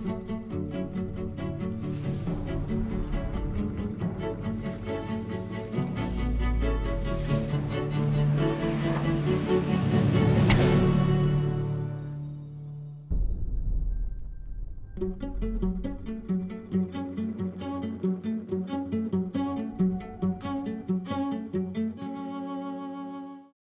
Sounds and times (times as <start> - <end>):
Music: 0.0 - 23.6.